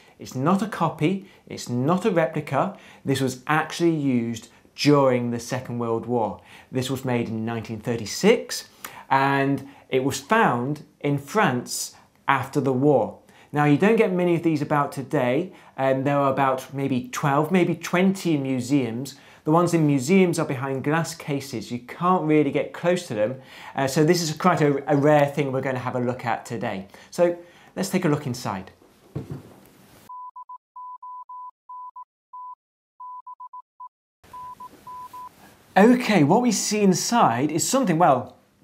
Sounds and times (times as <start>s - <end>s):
Speech: 0.2s - 28.8s, 35.8s - 38.4s.